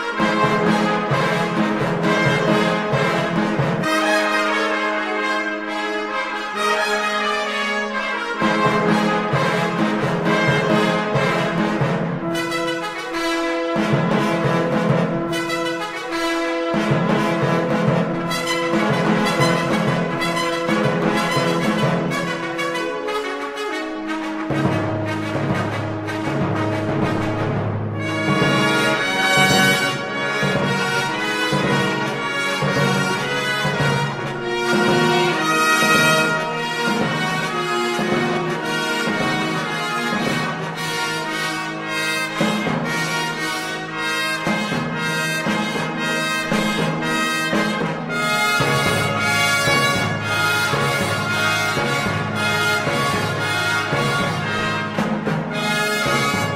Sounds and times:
Piano: 0:00.0 - 0:56.5.

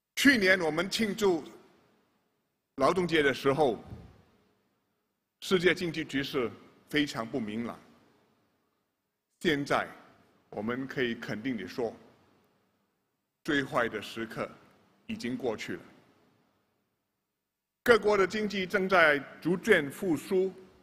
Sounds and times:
Narration, monologue: 0:00.0 - 0:20.8
Male speech, man speaking: 0:00.2 - 0:01.6, 0:02.8 - 0:04.0, 0:05.4 - 0:07.8, 0:09.4 - 0:12.0, 0:13.4 - 0:15.9, 0:17.8 - 0:20.6.

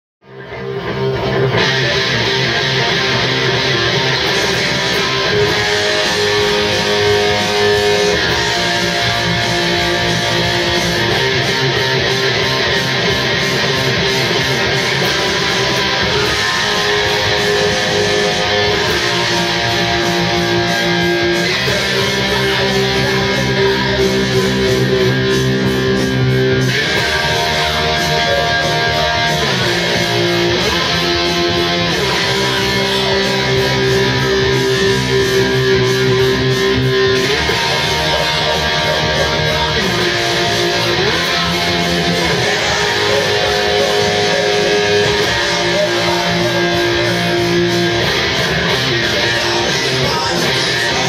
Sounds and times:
Music: 0:00.2 - 0:51.0.

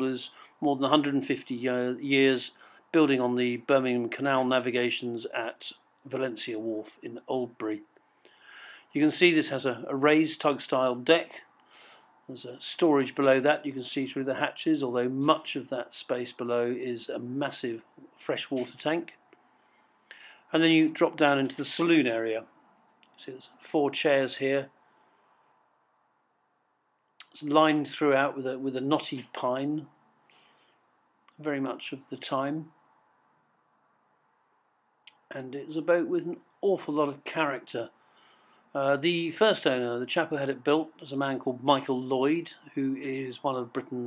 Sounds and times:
Speech: 0:00.0 - 0:07.9, 0:08.9 - 0:11.5, 0:12.3 - 0:19.2, 0:20.5 - 0:22.5, 0:23.1 - 0:24.8, 0:27.2 - 0:29.9, 0:31.4 - 0:32.8, 0:35.1 - 0:38.0, 0:38.8 - 0:44.0.

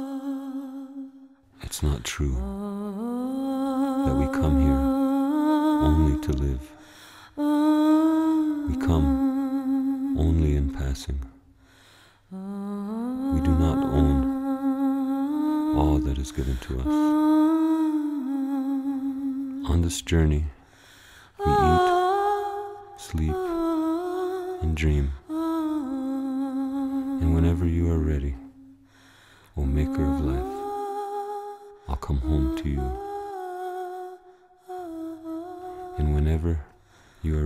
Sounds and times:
Humming: 0:00.0 - 0:11.5, 0:12.3 - 0:37.4.

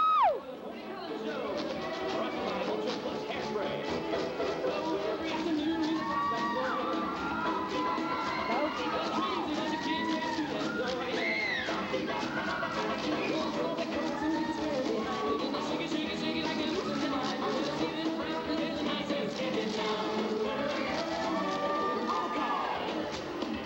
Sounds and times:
Music: 0:00.0 - 0:23.6.

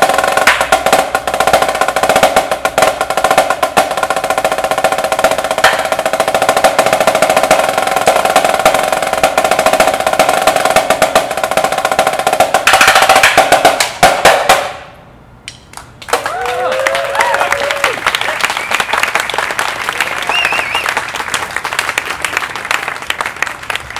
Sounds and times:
Snare drum: 0:00.0 - 0:14.9
Outside, urban or manmade: 0:00.0 - 0:23.9.

